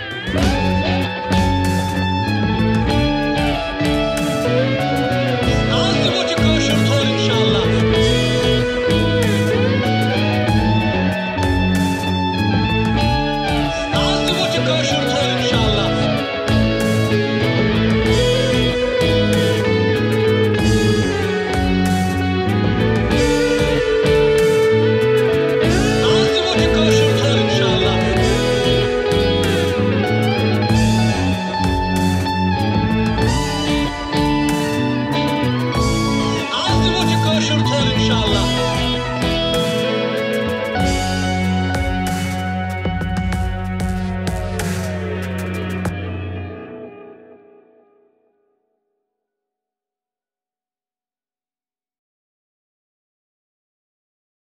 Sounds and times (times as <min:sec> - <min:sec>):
Rock music: 0:00.0 - 0:48.0.